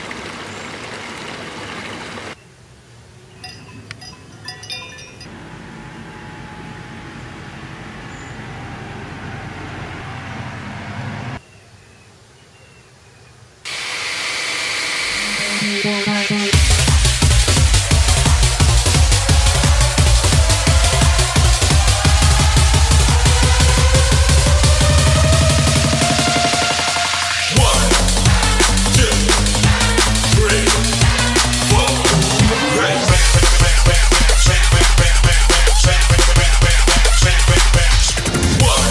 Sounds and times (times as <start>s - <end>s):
Drum and bass: 15.2s - 38.9s.